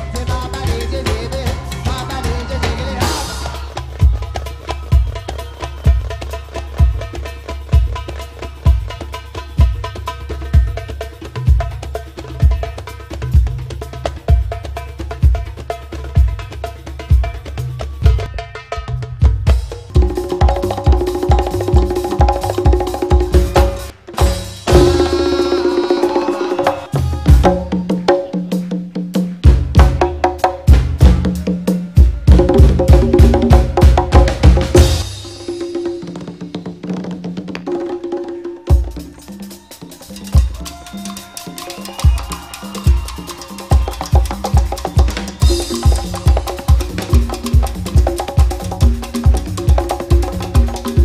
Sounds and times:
Percussion: 0.0 - 51.0.

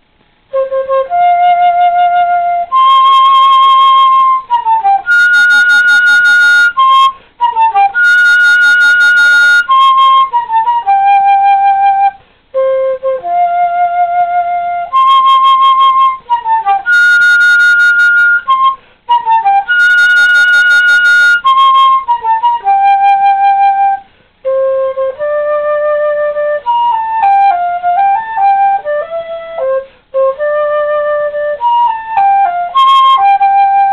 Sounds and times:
Flute: 0.4 - 33.9.

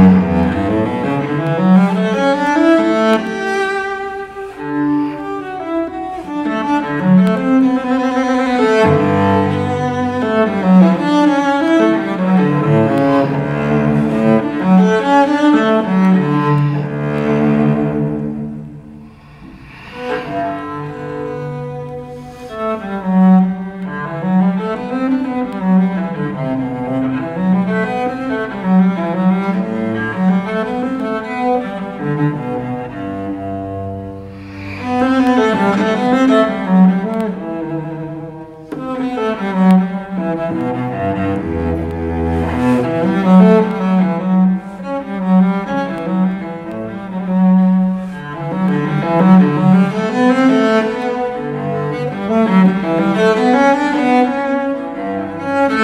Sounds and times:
Music: 0.0 - 55.8.

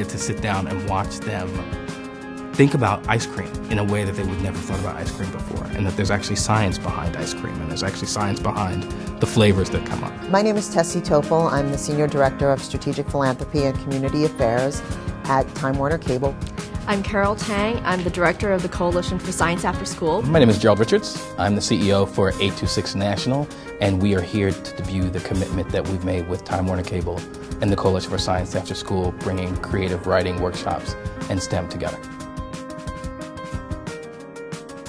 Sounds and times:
Speech: 0.0 - 1.6, 2.6 - 14.7, 20.1 - 32.0
Music: 0.0 - 34.8.

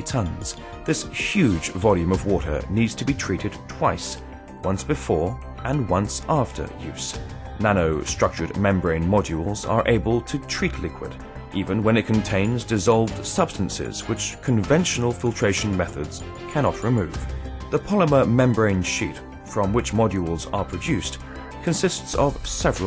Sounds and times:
Music: 0.0 - 22.8
Speech: 0.0 - 22.8.

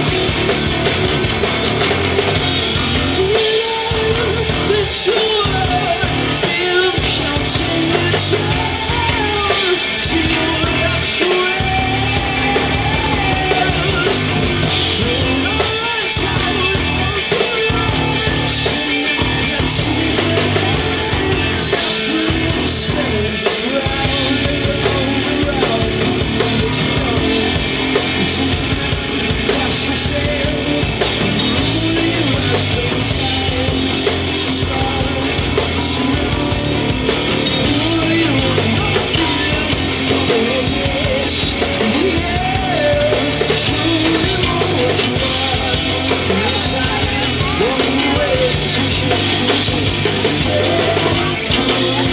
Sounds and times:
Independent music: 0.0 - 52.1
Rock and roll: 0.0 - 52.1.

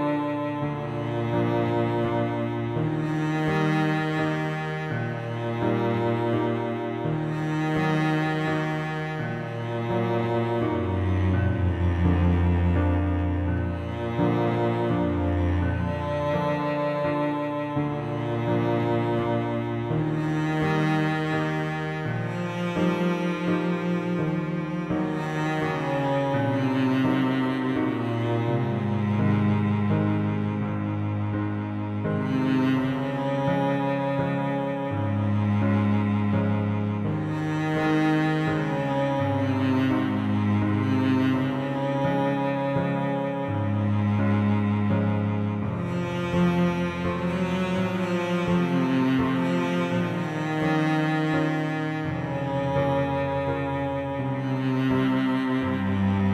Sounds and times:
Sad music: 0.0 - 56.3.

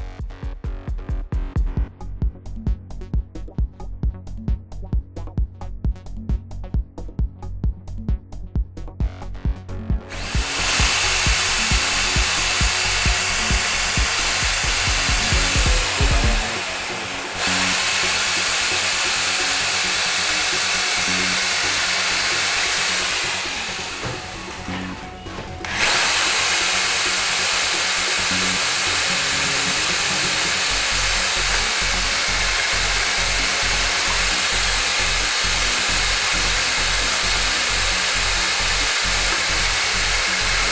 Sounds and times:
Music: 0.0 - 40.7.

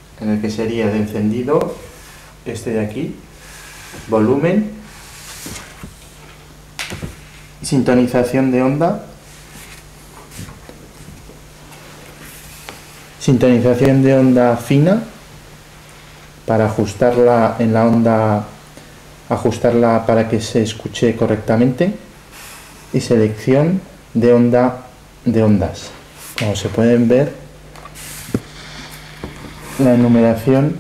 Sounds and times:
Speech: 0.2 - 3.2, 4.1 - 4.8, 7.6 - 9.2, 13.2 - 15.2, 16.5 - 18.6, 19.3 - 22.1, 22.9 - 27.5, 29.8 - 30.8.

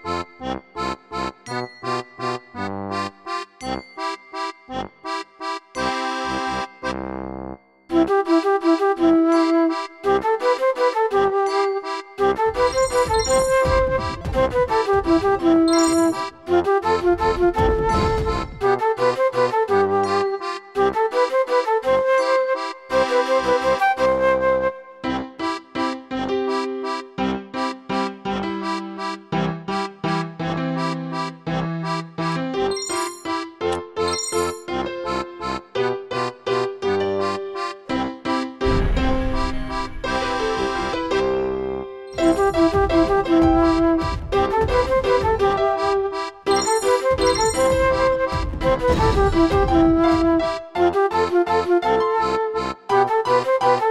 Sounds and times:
Music: 0.0 - 53.9.

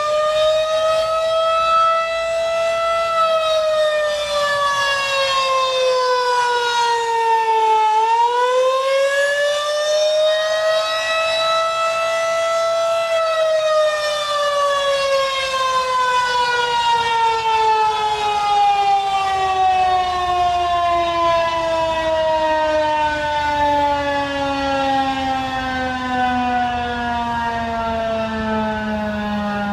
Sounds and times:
Civil defense siren: 0.0 - 29.7.

